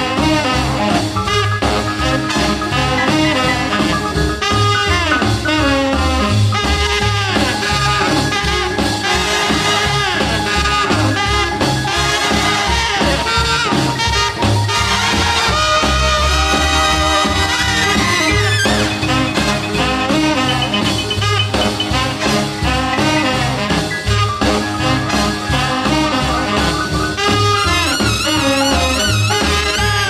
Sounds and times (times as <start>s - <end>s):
Orchestra: 0.0s - 30.1s.